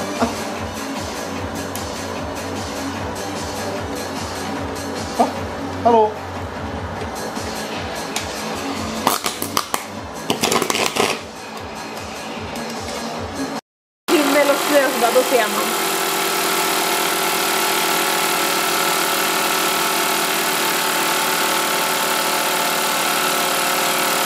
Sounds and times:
Speech: 0:05.2 - 0:06.2, 0:14.1 - 0:15.7
Power tool: 0:14.1 - 0:24.2.

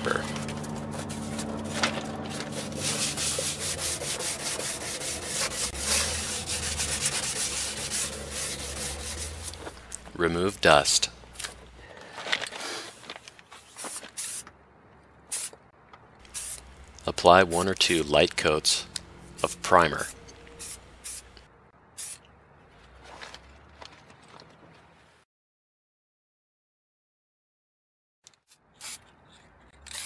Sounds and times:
Sanding: 0:00.9 - 0:09.8
Rub: 0:02.4 - 0:09.8.

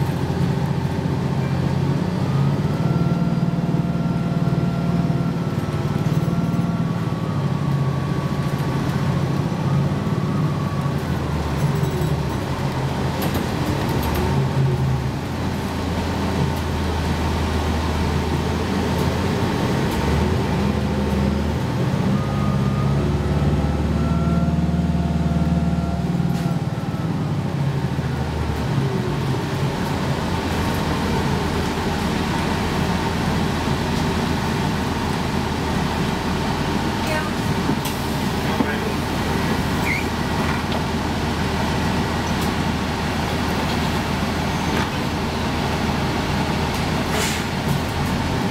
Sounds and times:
Bus: 0:00.0 - 0:48.5.

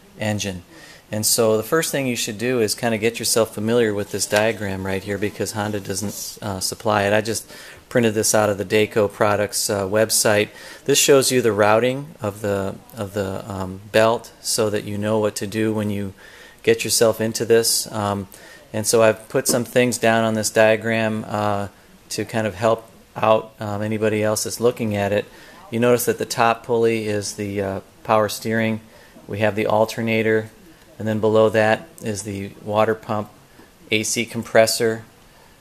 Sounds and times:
Speech: 0:00.0 - 0:35.1.

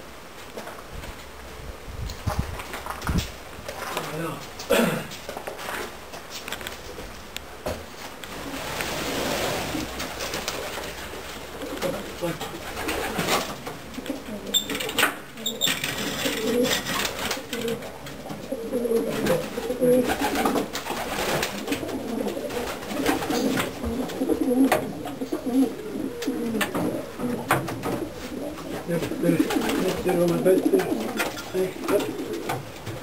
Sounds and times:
Speech: 0:03.9 - 0:04.5, 0:11.8 - 0:12.5, 0:28.9 - 0:32.2
Pigeon, dove: 0:11.6 - 0:33.0.

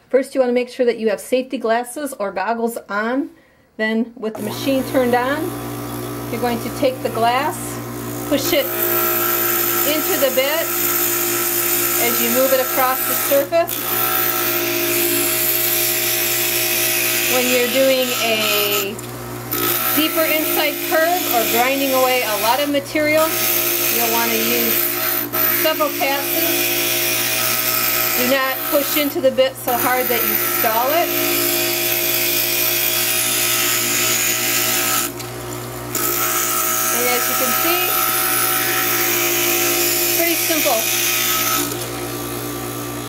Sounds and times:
Speech: 0:00.1 - 0:05.6, 0:06.3 - 0:08.7, 0:09.9 - 0:10.7, 0:12.0 - 0:13.7, 0:17.3 - 0:19.0, 0:20.0 - 0:24.8, 0:25.6 - 0:26.6, 0:28.2 - 0:31.1, 0:36.9 - 0:38.0, 0:40.2 - 0:40.9.

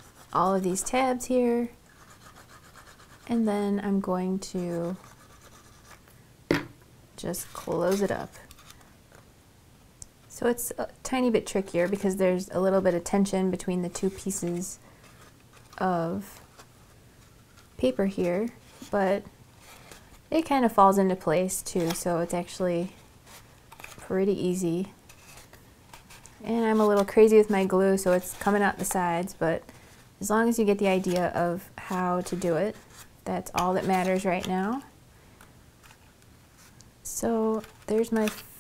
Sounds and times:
Inside, small room: 0:00.0 - 0:38.6
Speech: 0:00.4 - 0:01.8, 0:03.3 - 0:05.0, 0:07.2 - 0:08.4, 0:10.3 - 0:14.8, 0:15.8 - 0:16.4, 0:17.8 - 0:19.3, 0:20.3 - 0:23.0, 0:24.0 - 0:24.9, 0:26.4 - 0:29.6, 0:30.2 - 0:34.9, 0:37.0 - 0:38.6.

